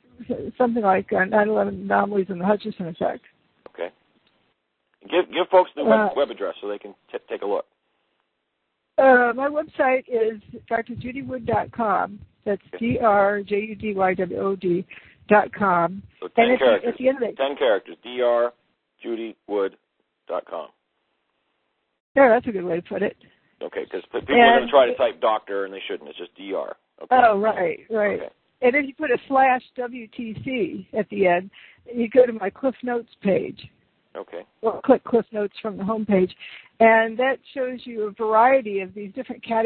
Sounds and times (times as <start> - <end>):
Speech: 0.2 - 3.9, 5.0 - 7.6, 9.0 - 20.7, 22.2 - 39.6.